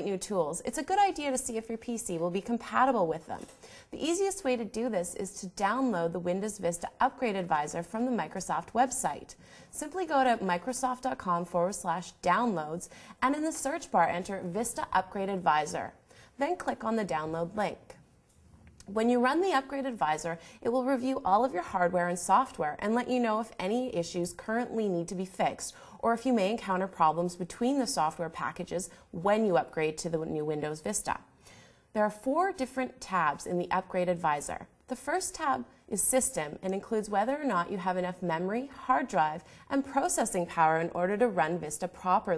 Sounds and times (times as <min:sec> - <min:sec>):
Speech: 0:00.0 - 0:18.0, 0:18.8 - 0:31.3, 0:32.0 - 0:42.3.